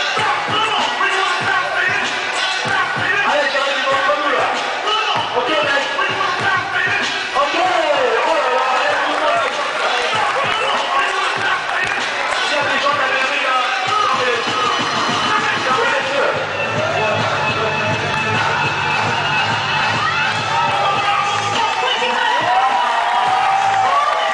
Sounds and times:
Music: 0.0s - 24.3s.

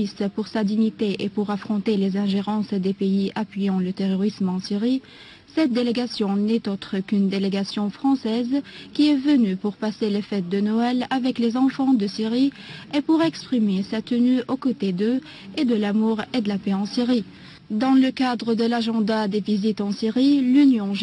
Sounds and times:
Speech: 0.0s - 21.0s.

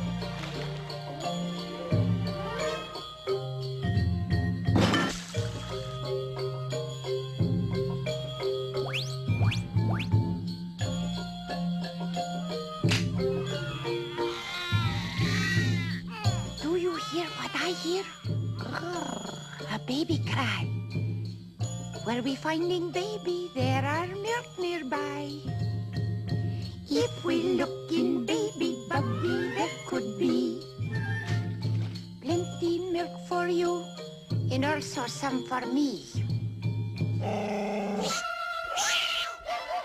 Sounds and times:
Music: 0.0s - 38.2s.

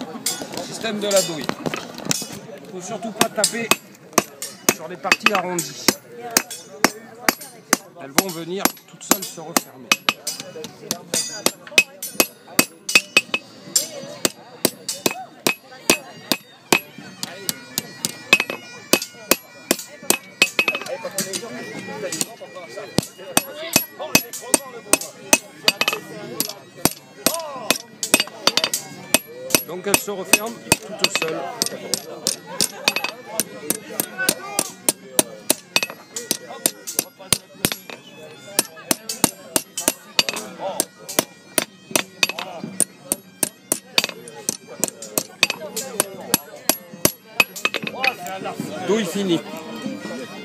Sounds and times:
Speech: 0.0s - 1.6s, 2.2s - 41.5s, 42.1s - 50.4s.

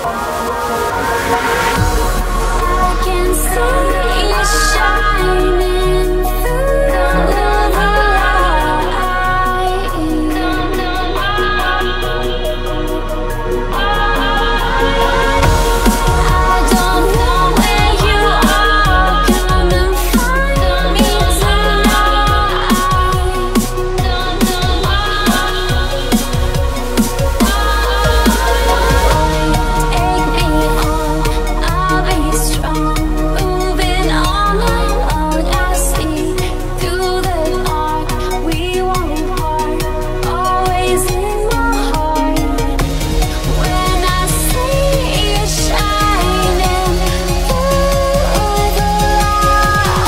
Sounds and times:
Dubstep: 0.0s - 50.0s.

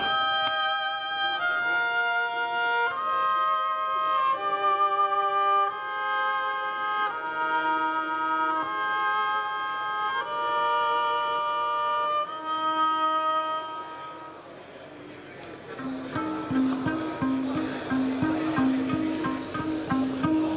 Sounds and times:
Violin, fiddle: 0.0s - 14.4s.

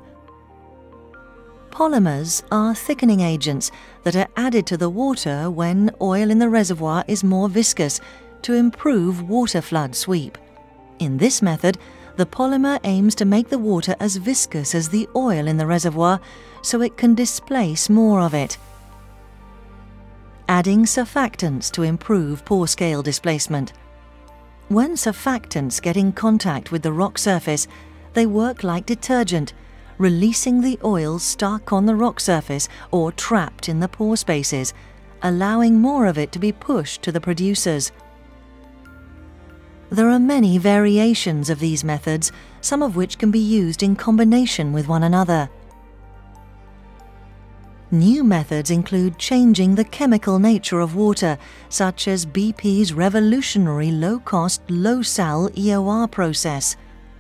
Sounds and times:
Music: 0.0s - 57.2s
Speech: 1.8s - 10.4s, 11.0s - 18.6s, 20.5s - 23.8s, 24.7s - 38.0s, 40.0s - 45.5s, 47.9s - 56.8s.

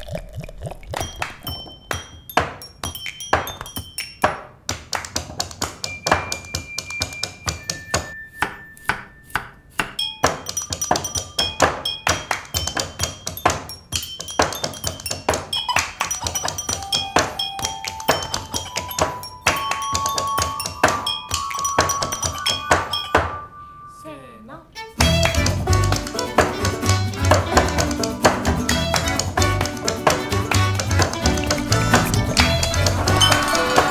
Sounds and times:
Music: 16.2s - 23.3s, 24.8s - 33.9s.

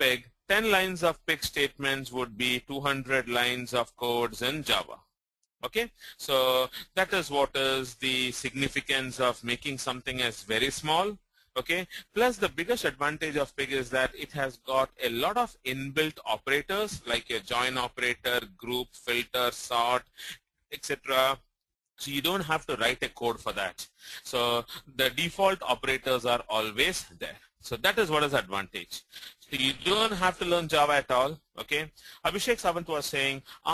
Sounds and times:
Speech: 0.0s - 33.7s.

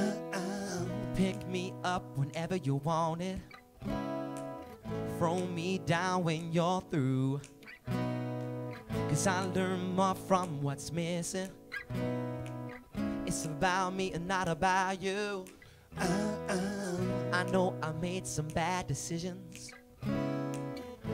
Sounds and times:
Music: 0.0s - 21.1s.

